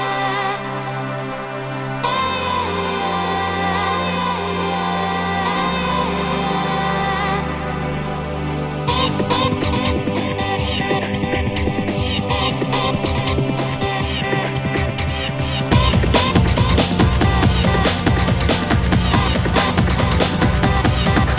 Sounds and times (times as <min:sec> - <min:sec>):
Soundtrack music: 0:00.0 - 0:21.3.